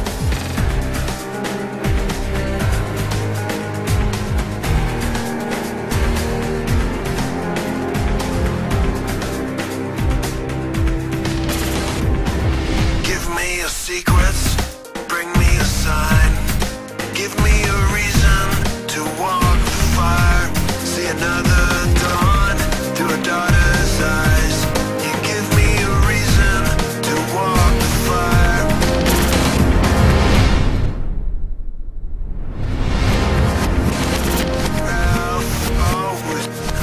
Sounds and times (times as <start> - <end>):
Music: 0.0 - 31.4, 32.3 - 36.8.